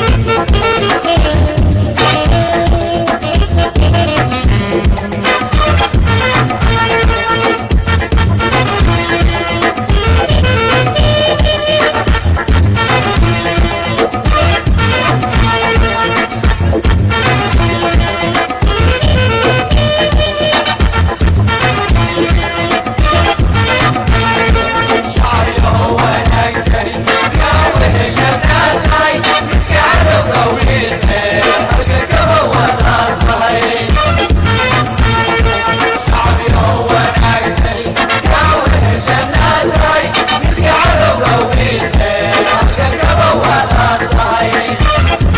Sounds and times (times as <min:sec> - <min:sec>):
Music: 0:00.0 - 0:45.3.